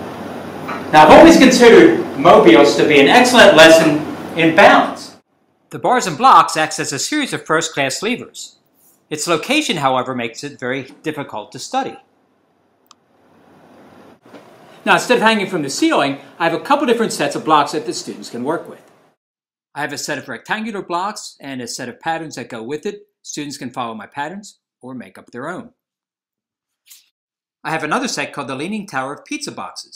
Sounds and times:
Speech: 0:00.9 - 0:08.5, 0:09.1 - 0:12.0, 0:14.8 - 0:18.8, 0:19.8 - 0:25.7, 0:27.7 - 0:29.9.

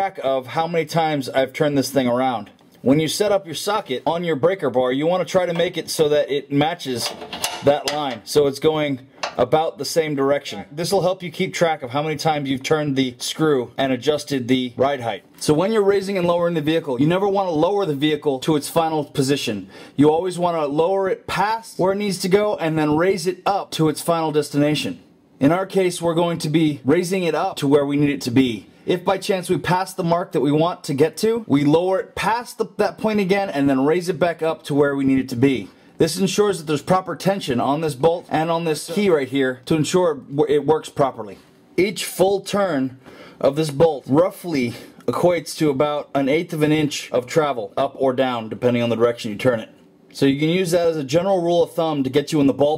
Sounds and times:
Inside, small room: 0:00.0 - 0:52.7
Speech: 0:00.0 - 0:52.7.

